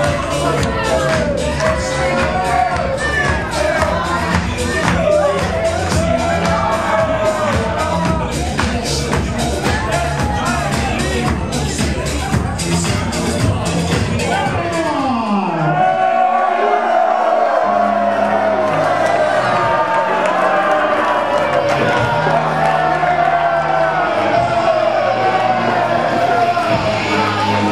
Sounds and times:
Speech: 0.0 - 15.8
Music: 0.0 - 27.7.

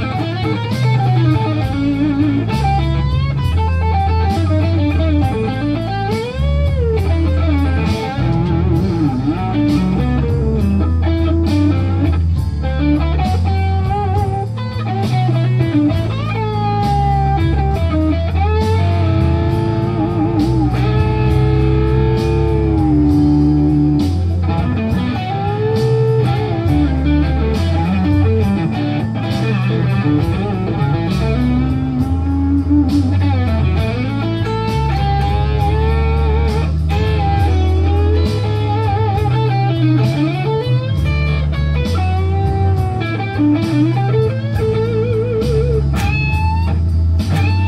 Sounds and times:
Electric guitar: 0.0 - 47.6
Strum: 0.0 - 47.6.

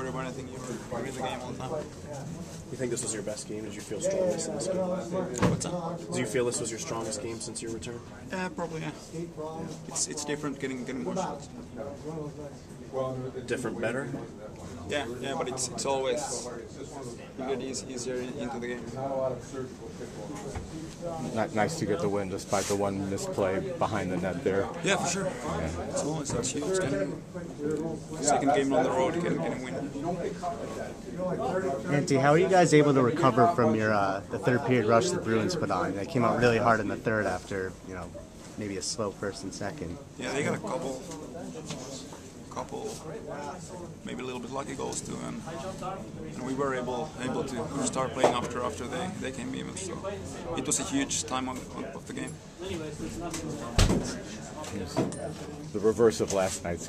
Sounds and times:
Speech: 8.7 - 56.8.

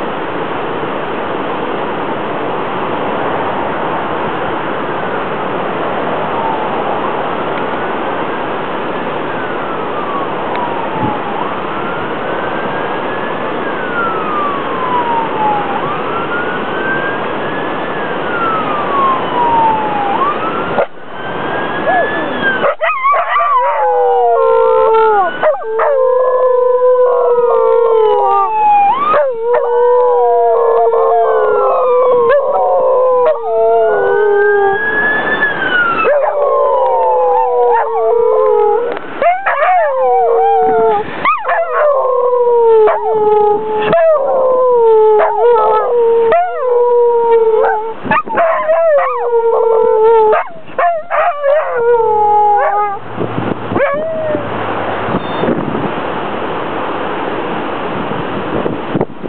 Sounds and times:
Police car (siren): 5.9 - 7.9, 8.9 - 56.0.

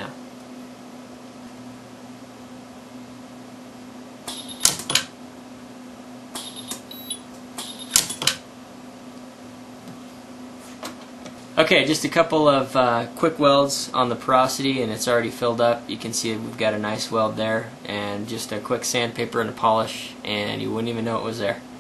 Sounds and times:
Speech: 0.0 - 0.2, 11.6 - 21.7.

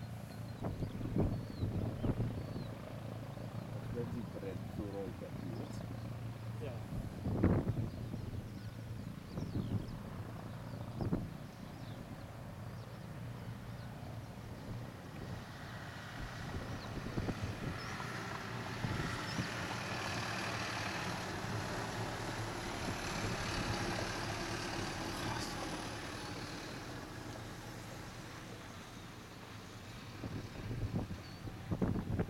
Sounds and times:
Speech: 3.8 - 5.8, 6.6 - 6.9, 25.2 - 25.8.

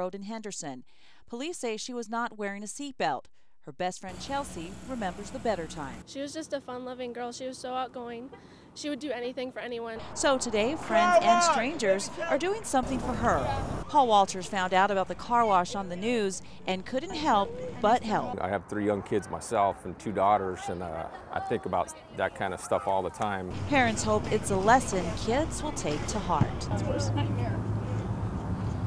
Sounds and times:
Speech: 16.8 - 27.2.

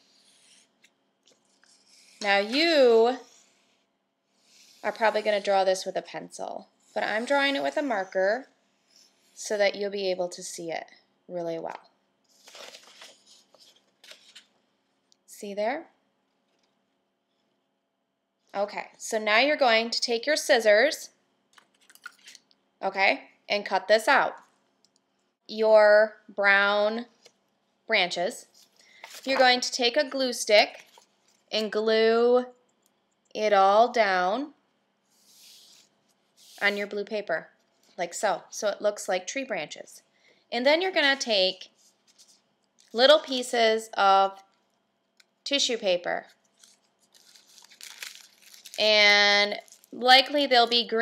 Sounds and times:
Speech: 4.9 - 8.5, 9.4 - 11.9, 15.3 - 16.0, 18.6 - 21.2, 22.8 - 24.4, 27.9 - 28.5, 31.6 - 32.6, 36.6 - 41.7, 43.0 - 44.4, 45.5 - 46.3, 48.8 - 51.0.

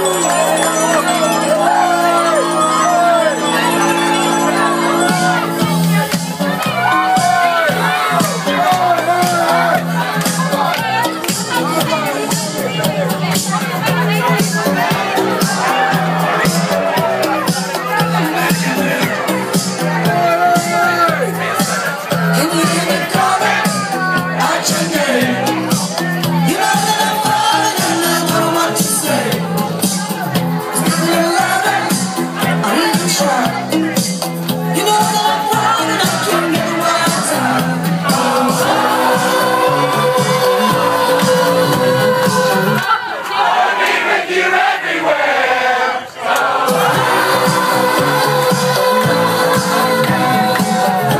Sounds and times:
Speech: 0.0 - 39.7
Music: 0.0 - 44.9, 46.3 - 51.1.

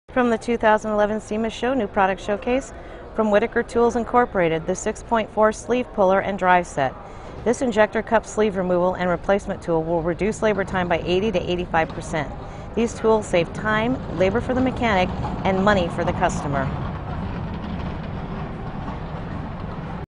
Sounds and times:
Speech: 0.1 - 16.8.

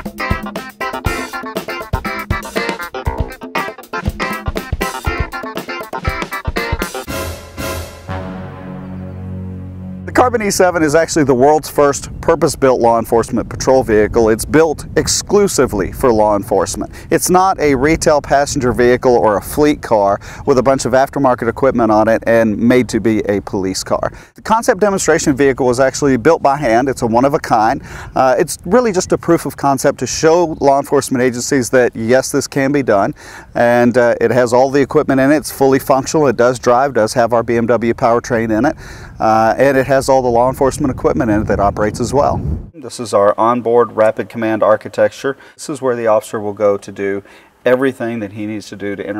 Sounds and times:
Speech: 10.1 - 49.1.

